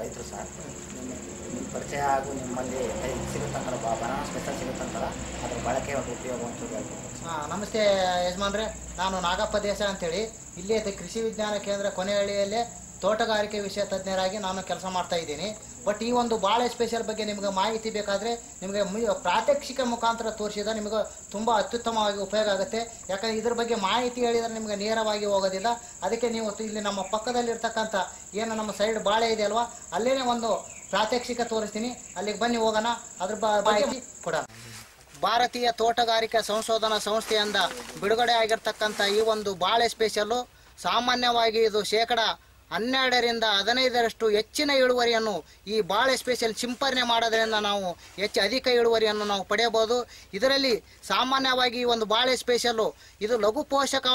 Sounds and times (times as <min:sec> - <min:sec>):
Speech: 0:00.0 - 0:54.1.